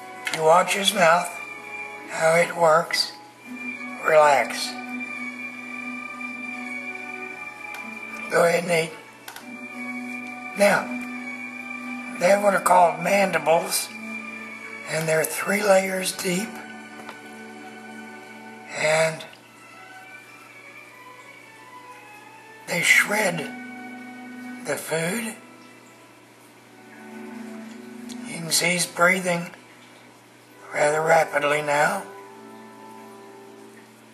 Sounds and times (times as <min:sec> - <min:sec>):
Music: 0:00.0 - 0:34.1
Speech: 0:00.3 - 0:01.4, 0:02.1 - 0:03.2, 0:04.0 - 0:04.8, 0:08.3 - 0:09.0, 0:10.6 - 0:11.0, 0:12.2 - 0:14.0, 0:14.9 - 0:16.6, 0:18.7 - 0:19.3, 0:22.7 - 0:23.6, 0:24.6 - 0:25.4, 0:28.2 - 0:29.6, 0:30.7 - 0:32.1.